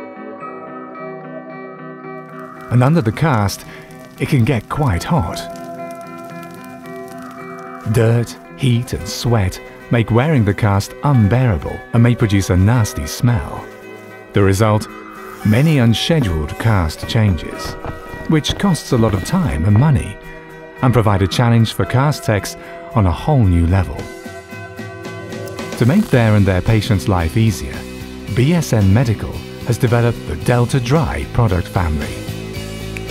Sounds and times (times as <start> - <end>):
Music: 0.0 - 33.1
Speech: 2.7 - 5.6, 7.8 - 13.7, 14.3 - 20.2, 20.8 - 24.2, 25.8 - 32.3.